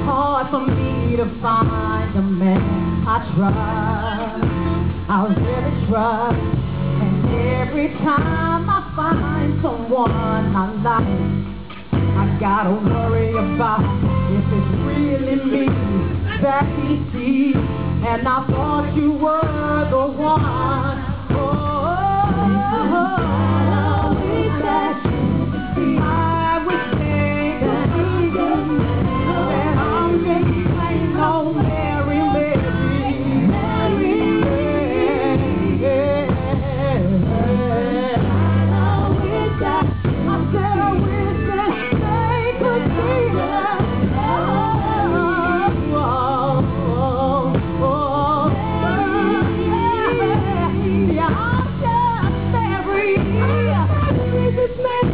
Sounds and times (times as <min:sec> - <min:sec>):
Music: 0:00.0 - 0:55.1.